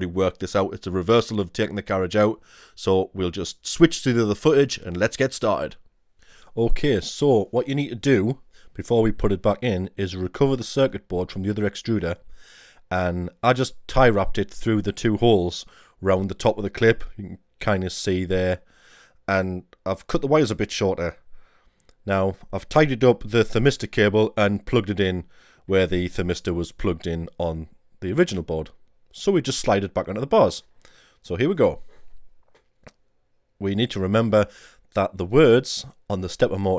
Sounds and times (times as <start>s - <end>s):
Speech: 0.0s - 5.8s, 6.6s - 12.2s, 12.9s - 18.6s, 19.3s - 21.2s, 22.0s - 31.9s, 33.6s - 36.7s.